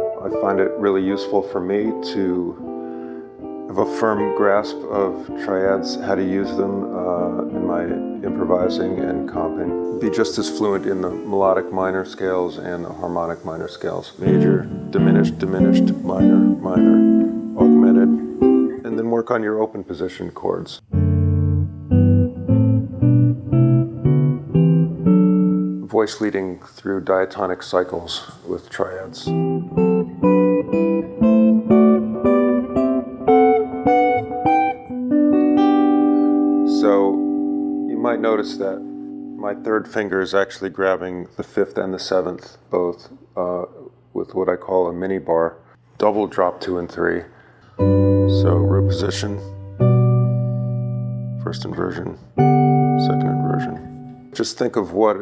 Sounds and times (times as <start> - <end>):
Electric guitar: 0.0 - 1.3, 1.9 - 11.9, 14.2 - 18.9, 20.8 - 25.8, 29.3 - 39.9, 47.8 - 54.4
Electronic tuner: 0.0 - 12.7, 14.2 - 19.1, 20.8 - 25.9, 29.2 - 40.1, 47.7 - 54.4
Inside, small room: 0.0 - 55.2
Speech: 0.2 - 2.7, 3.7 - 20.8, 25.8 - 29.4, 36.7 - 37.2, 37.9 - 38.8, 39.4 - 47.4, 48.3 - 49.5, 51.4 - 52.3, 53.0 - 55.2
Strum: 14.2 - 19.2, 47.8 - 54.6.